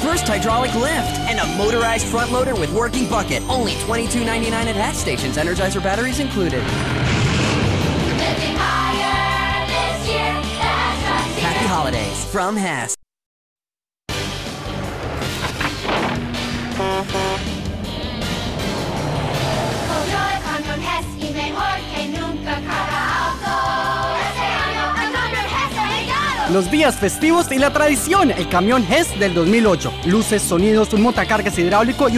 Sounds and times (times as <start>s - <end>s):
Music: 0.0s - 12.8s, 14.1s - 32.1s
Vehicle: 6.0s - 9.6s, 14.1s - 21.3s.